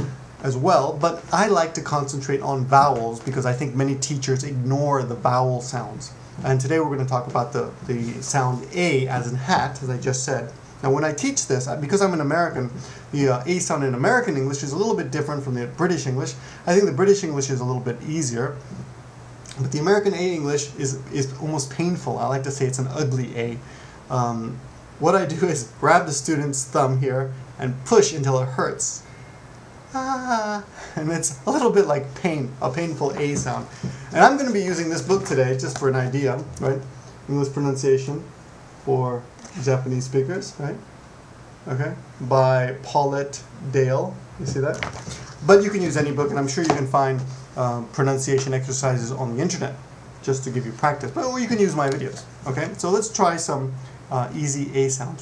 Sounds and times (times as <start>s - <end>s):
Speech: 0.0s - 18.8s, 19.5s - 29.1s, 30.0s - 38.3s, 38.9s - 40.8s, 41.7s - 55.2s.